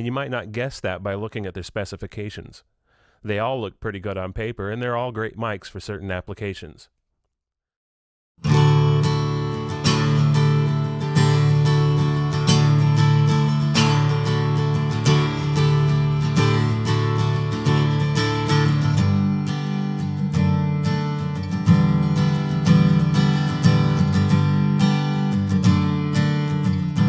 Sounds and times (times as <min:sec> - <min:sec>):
Acoustic guitar: 0:08.4 - 0:27.0.